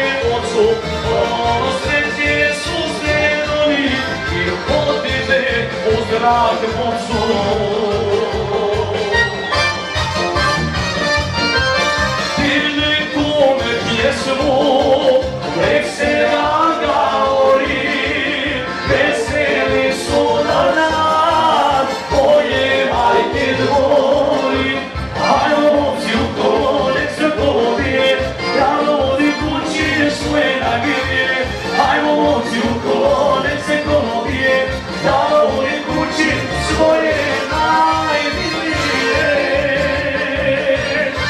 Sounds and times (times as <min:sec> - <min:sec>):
Music: 0:00.0 - 0:41.2.